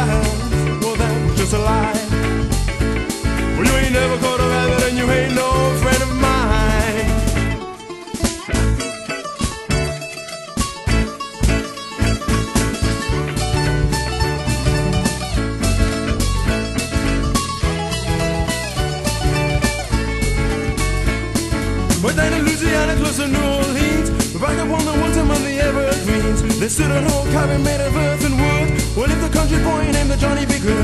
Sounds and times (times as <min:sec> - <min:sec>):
Rock and roll: 0:00.0 - 0:30.8.